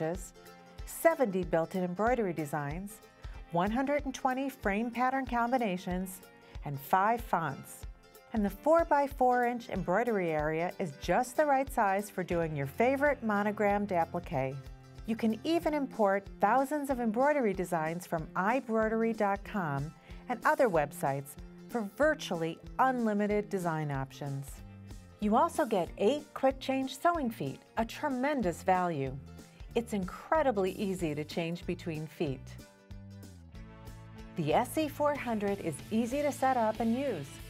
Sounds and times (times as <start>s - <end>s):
Music: 0.0s - 37.4s
Speech: 0.9s - 7.8s, 8.4s - 24.6s, 25.2s - 29.2s, 29.8s - 32.6s, 34.4s - 37.4s.